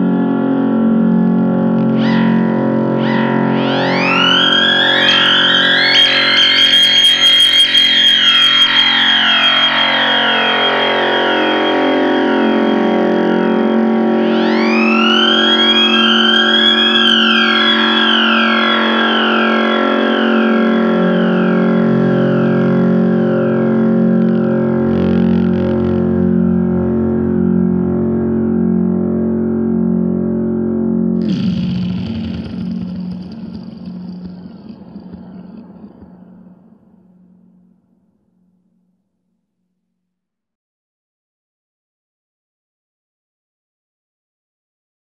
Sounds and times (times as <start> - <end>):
Theremin: 1.3 - 28.4, 31.2 - 37.2
Siren: 1.8 - 27.8, 31.2 - 37.0.